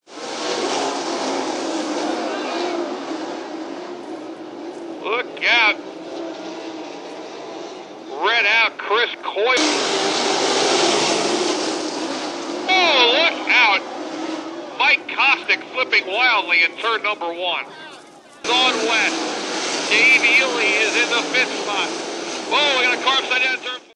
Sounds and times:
Speech: 5.0 - 5.8, 8.2 - 9.6, 12.7 - 13.9, 14.8 - 19.2, 19.9 - 23.9
Car passing by: 9.5 - 17.0, 18.5 - 23.8.

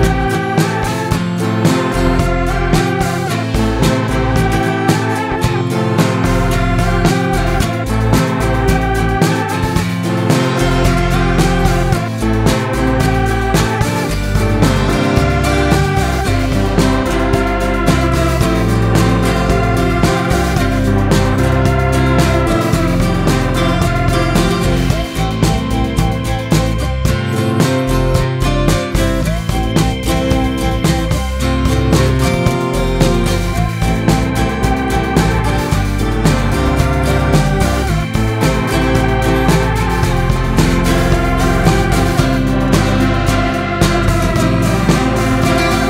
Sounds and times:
Music: 0.0 - 45.8.

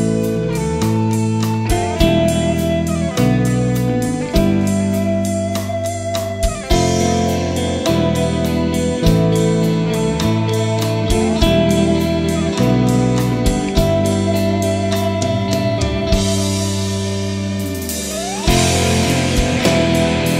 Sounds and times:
Steel guitar, slide guitar: 0.0 - 20.3.

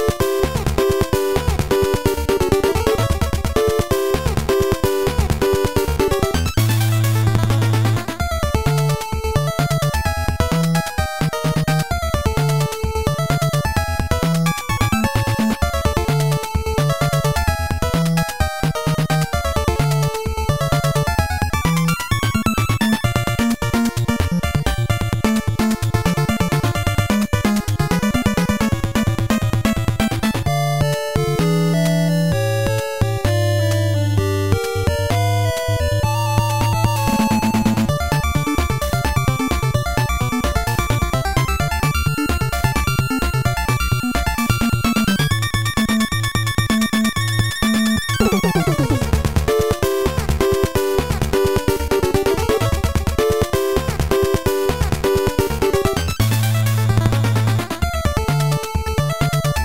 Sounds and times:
Music: 0.0 - 59.6.

